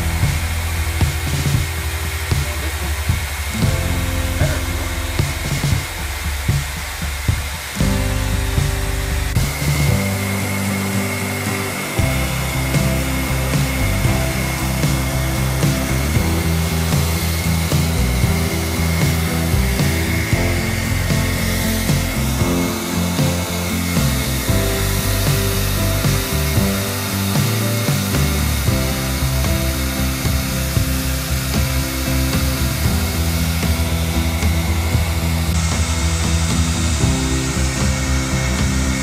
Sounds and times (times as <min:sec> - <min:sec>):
Music: 0:00.0 - 0:39.0.